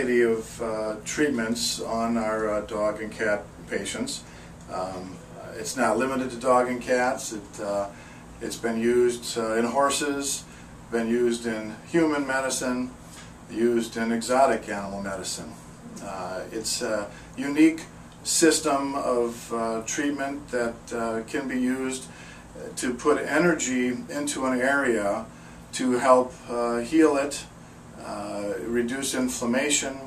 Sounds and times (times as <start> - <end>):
Speech: 0.0 - 30.0.